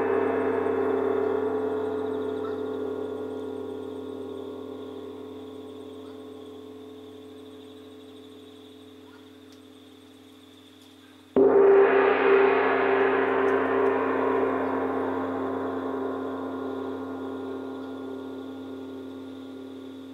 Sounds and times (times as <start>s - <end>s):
Gong: 0.0s - 6.9s, 11.4s - 20.1s.